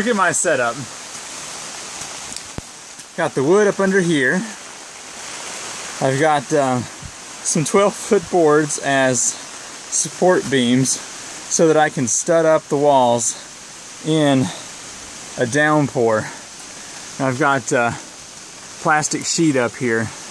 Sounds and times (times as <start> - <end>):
Speech: 0.0 - 0.9, 3.2 - 4.6, 6.0 - 13.4, 14.0 - 14.6, 15.4 - 16.4, 17.2 - 18.0, 18.8 - 20.2
Rain on surface: 0.0 - 20.3.